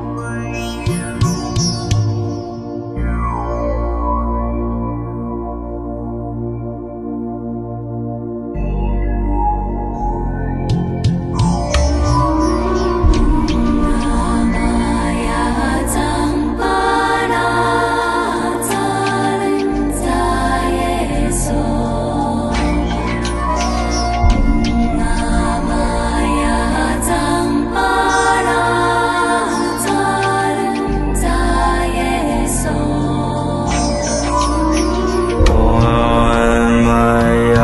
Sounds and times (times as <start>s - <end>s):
Mantra: 12.3s - 37.6s.